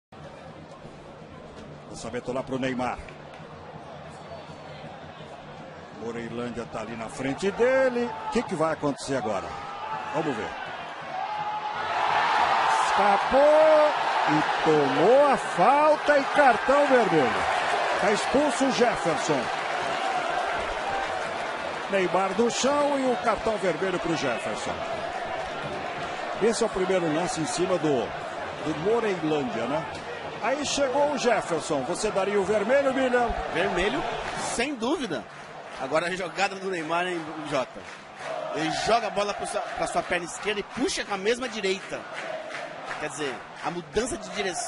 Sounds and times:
Speech: 0:06.0 - 0:10.6, 0:12.7 - 0:17.4, 0:18.0 - 0:19.5, 0:21.9 - 0:24.8, 0:26.4 - 0:37.8, 0:38.6 - 0:42.0, 0:43.0 - 0:44.6.

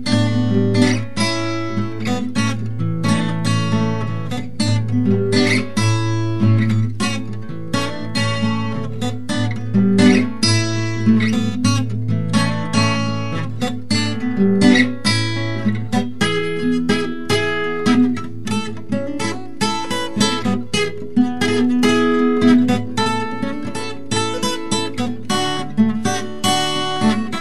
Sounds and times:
Acoustic guitar: 0:00.0 - 0:27.4.

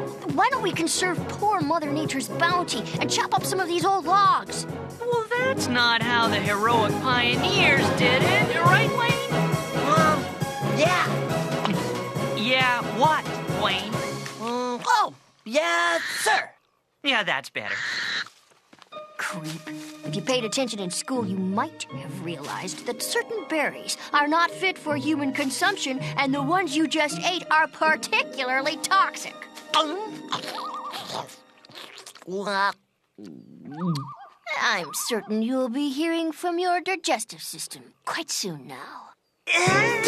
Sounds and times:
Music: 0:00.0 - 0:15.4, 0:18.9 - 0:31.9, 0:39.5 - 0:40.0
Speech: 0:00.2 - 0:10.2, 0:12.4 - 0:17.8, 0:19.2 - 0:31.4, 0:32.3 - 0:40.0.

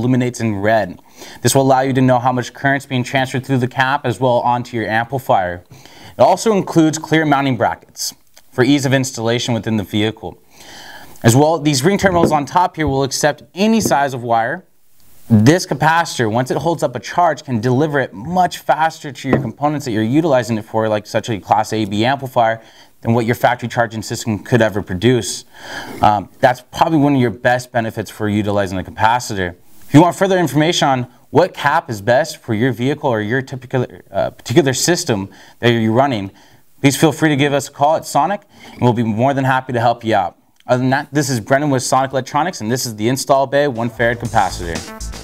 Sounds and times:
Speech: 0:00.0 - 0:10.4, 0:11.2 - 0:14.7, 0:15.3 - 0:44.9.

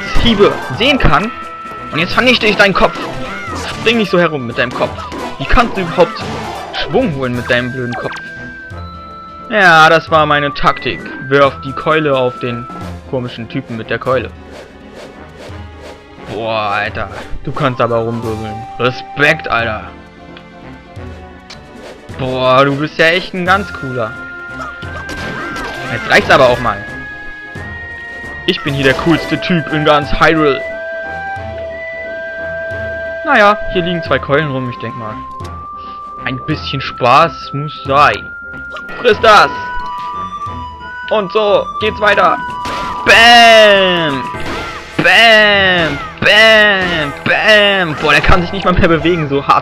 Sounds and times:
Music: 0:00.0 - 0:49.6
Speech: 0:22.2 - 0:24.1, 0:33.3 - 0:35.2, 0:36.2 - 0:38.3, 0:43.1 - 0:44.3, 0:45.0 - 0:49.6.

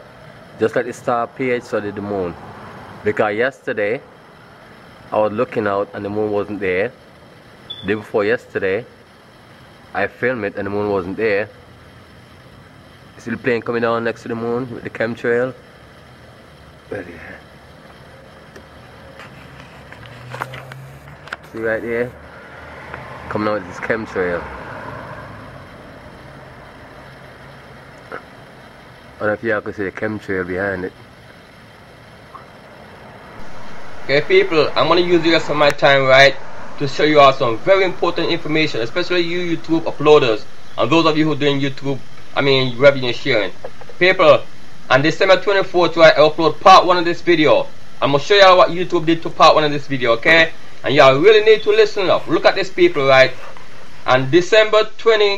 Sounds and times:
Speech: 0:00.6 - 0:02.4, 0:03.1 - 0:04.1, 0:05.1 - 0:07.0, 0:07.8 - 0:08.9, 0:10.0 - 0:11.5, 0:13.2 - 0:15.6, 0:16.9 - 0:17.4, 0:21.5 - 0:22.2, 0:23.3 - 0:24.5, 0:29.2 - 0:31.0, 0:34.1 - 0:53.4, 0:54.1 - 0:55.3.

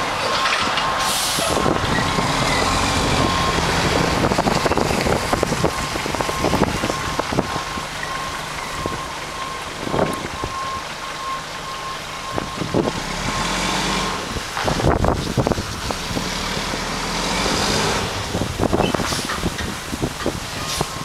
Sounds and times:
Reversing beeps: 0:00.2 - 0:04.1, 0:05.6 - 0:13.7, 0:20.6 - 0:21.0.

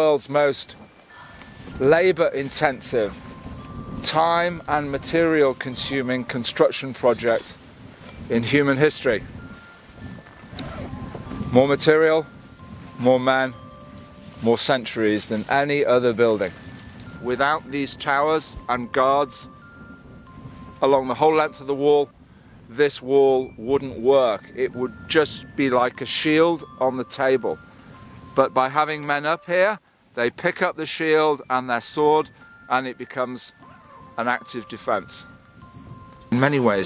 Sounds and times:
Speech: 0:00.0 - 0:00.8, 0:01.8 - 0:03.2, 0:04.0 - 0:07.6, 0:08.3 - 0:09.3, 0:11.5 - 0:12.3, 0:13.0 - 0:13.6, 0:14.4 - 0:16.6, 0:17.2 - 0:19.5, 0:20.8 - 0:22.1, 0:22.7 - 0:27.6, 0:28.4 - 0:33.6, 0:34.2 - 0:35.3, 0:36.3 - 0:36.8
Music: 0:00.9 - 0:08.3, 0:09.2 - 0:22.2, 0:23.4 - 0:29.6, 0:31.8 - 0:36.8.

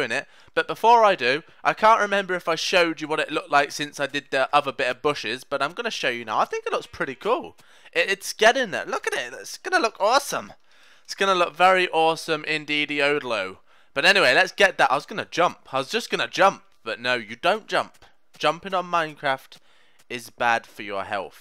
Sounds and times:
Speech: 0:00.0 - 0:21.4.

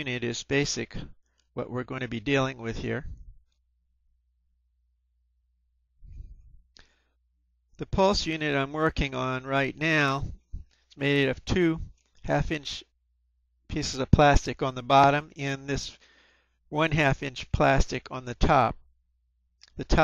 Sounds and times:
Speech: 0:00.0 - 0:03.2, 0:07.8 - 0:10.4, 0:11.0 - 0:12.9, 0:13.7 - 0:16.0, 0:16.7 - 0:18.8, 0:19.7 - 0:20.0.

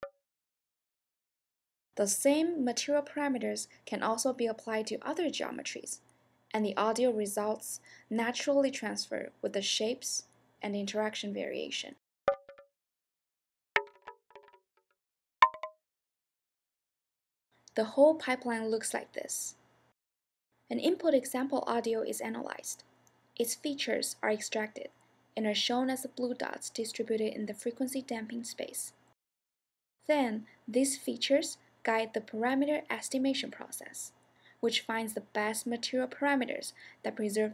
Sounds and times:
Speech: 0:02.0 - 0:12.0, 0:17.8 - 0:19.6, 0:20.7 - 0:22.8, 0:23.4 - 0:29.0, 0:30.1 - 0:37.5.

